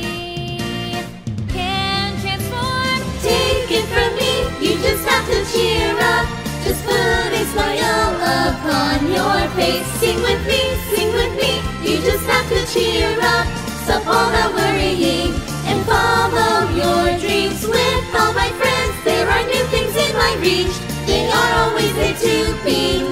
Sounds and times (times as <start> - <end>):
Jingle (music): 0.0 - 23.1.